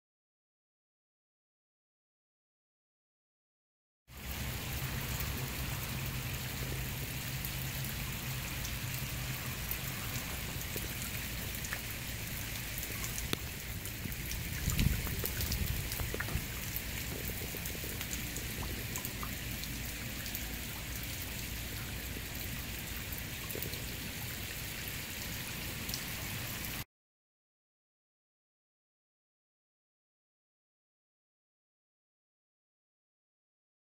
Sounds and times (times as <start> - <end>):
Raindrop: 4.1 - 26.9.